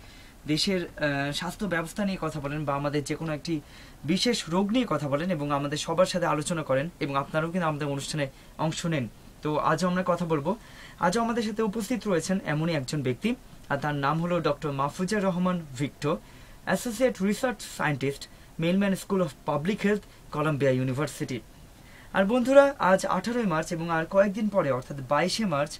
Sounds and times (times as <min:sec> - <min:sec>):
Speech: 0:00.5 - 0:21.4, 0:22.1 - 0:25.7.